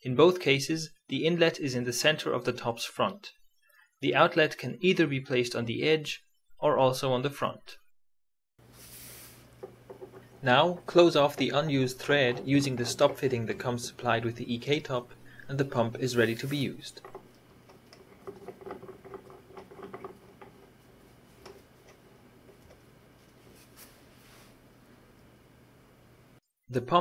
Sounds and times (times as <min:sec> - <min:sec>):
Speech: 0:00.0 - 0:03.4, 0:04.0 - 0:07.8, 0:10.4 - 0:17.0, 0:26.7 - 0:27.0.